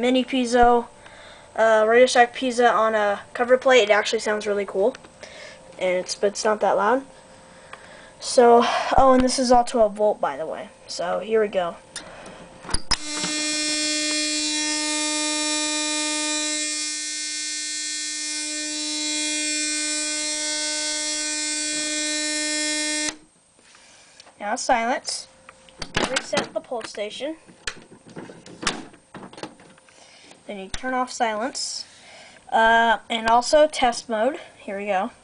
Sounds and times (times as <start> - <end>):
Speech: 0.0 - 0.9, 1.6 - 5.0, 5.8 - 7.1, 8.2 - 11.8, 24.4 - 25.3, 26.0 - 27.4, 30.5 - 31.9, 32.5 - 35.2
Inside, small room: 0.0 - 35.2
Fire alarm: 12.8 - 23.2.